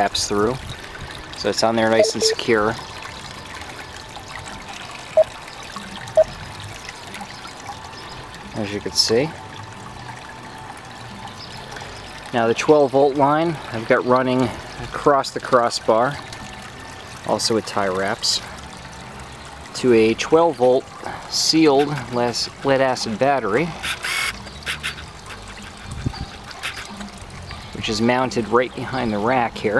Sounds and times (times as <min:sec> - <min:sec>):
Speech: 0:01.4 - 0:02.8, 0:08.6 - 0:09.4, 0:12.3 - 0:16.2, 0:19.8 - 0:23.7, 0:27.8 - 0:29.7.